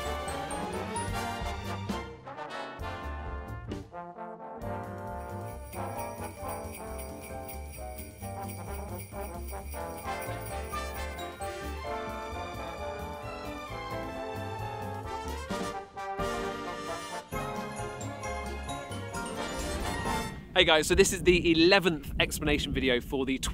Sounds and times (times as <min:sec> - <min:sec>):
Music: 0:00.0 - 0:20.6
Speech: 0:20.6 - 0:23.5.